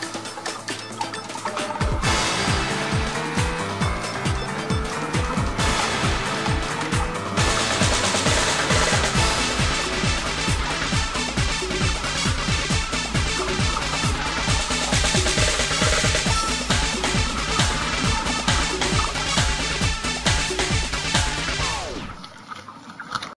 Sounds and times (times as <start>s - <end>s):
Music: 0.0s - 22.2s.